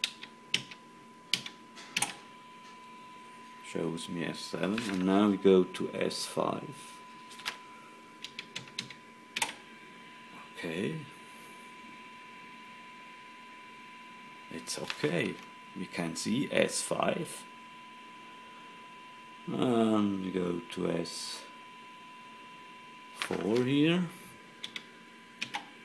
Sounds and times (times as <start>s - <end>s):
Speech: 3.6s - 7.0s, 10.4s - 11.2s, 14.5s - 17.5s, 19.5s - 21.6s, 23.2s - 24.3s.